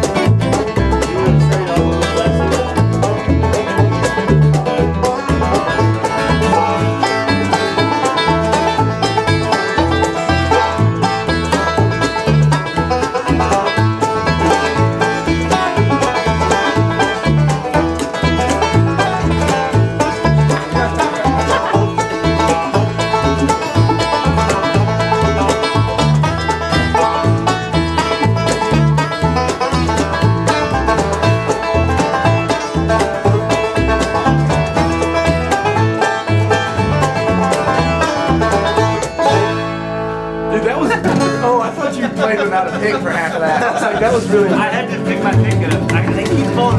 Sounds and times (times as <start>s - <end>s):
Banjo: 0.0s - 46.7s
Bluegrass: 0.0s - 46.7s
Speech: 0.9s - 4.2s, 40.5s - 46.7s.